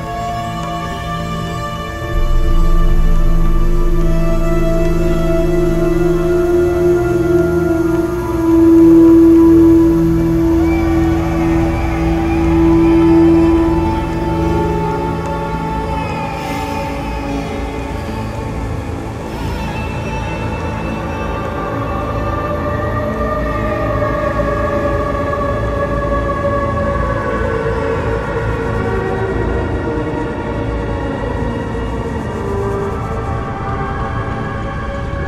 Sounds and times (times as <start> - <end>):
Theme music: 0.0 - 19.3.